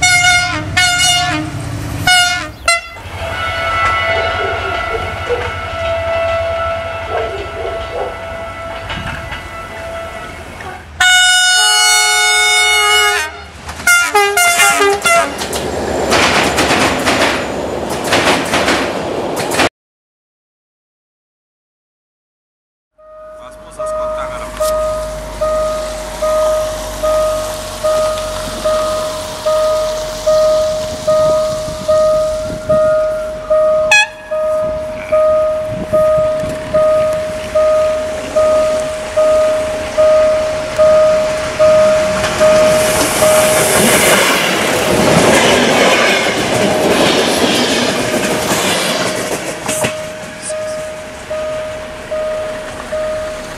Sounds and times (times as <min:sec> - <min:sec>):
Railroad car, train wagon: 0:00.0 - 0:19.7, 0:23.0 - 0:53.5
Train: 0:00.0 - 0:19.7, 0:23.0 - 0:53.5
Clickety-clack: 0:14.9 - 0:19.7, 0:42.2 - 0:50.0.